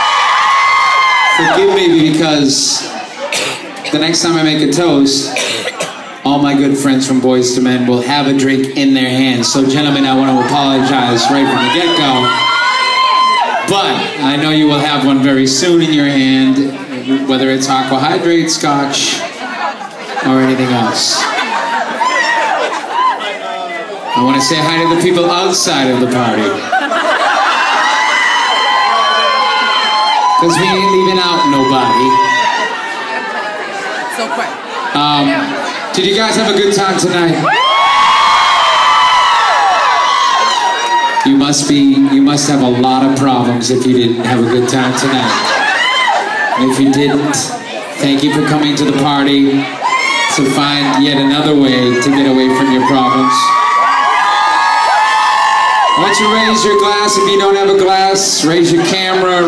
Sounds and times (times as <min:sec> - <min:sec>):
Male speech, man speaking: 0:01.4 - 0:02.9, 0:03.9 - 0:05.4, 0:06.2 - 0:12.4, 0:13.6 - 0:19.3, 0:20.2 - 0:21.3, 0:24.1 - 0:26.6, 0:30.4 - 0:32.4, 0:34.9 - 0:37.5, 0:41.2 - 0:45.5, 0:46.6 - 0:53.6, 0:56.0 - 0:59.4.